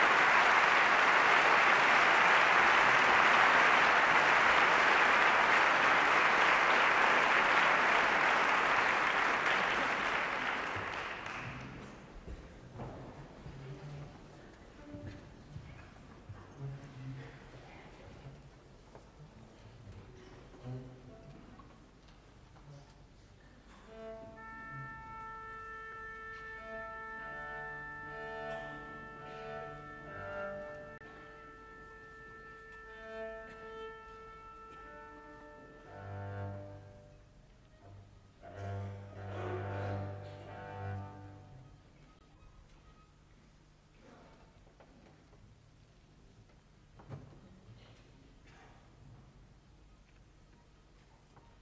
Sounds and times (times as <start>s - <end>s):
Cello: 0.0s - 43.0s.